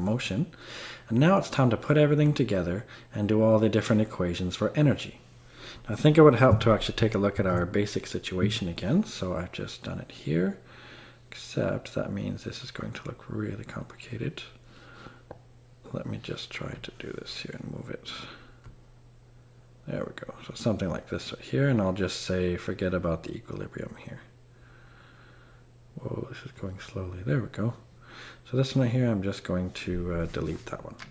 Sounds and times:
Speech: 0.0s - 5.2s, 5.9s - 10.6s, 11.3s - 14.6s, 15.8s - 18.4s, 19.8s - 24.3s, 26.0s - 31.1s.

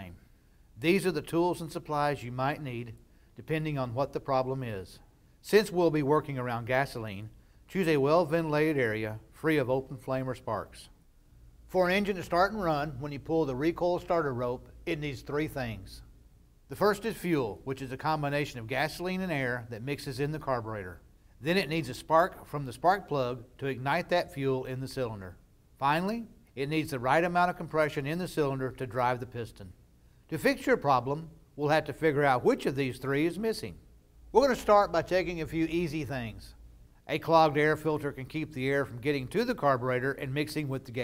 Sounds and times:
Speech: 0.0s - 0.2s, 0.8s - 11.0s, 11.7s - 16.1s, 16.7s - 41.0s.

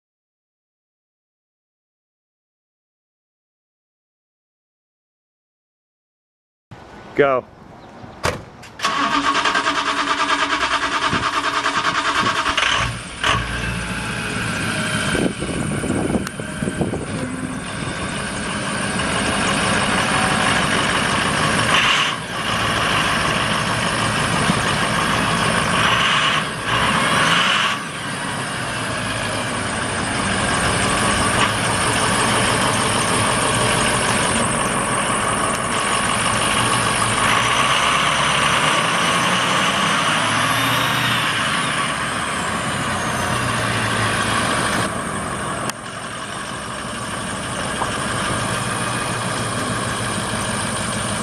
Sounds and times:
Truck: 6.7s - 51.2s.

